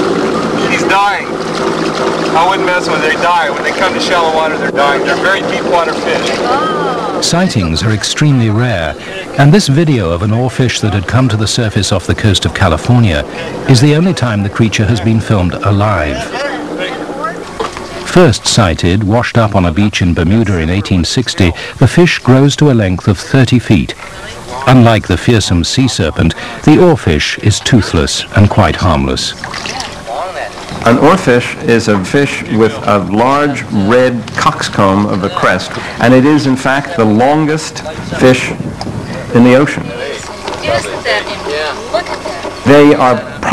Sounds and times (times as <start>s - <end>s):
Outside, rural or natural: 0.0s - 43.5s
Speech: 2.4s - 17.1s, 18.0s - 29.4s, 30.8s - 38.6s, 39.2s - 43.5s.